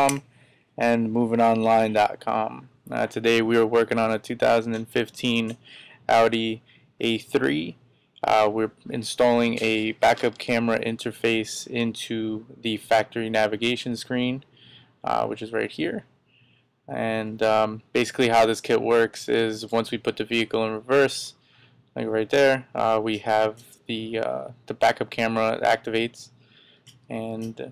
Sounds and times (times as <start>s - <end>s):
Speech: 0.0s - 0.2s, 0.8s - 16.1s, 16.9s - 21.4s, 22.0s - 26.3s, 27.1s - 27.7s.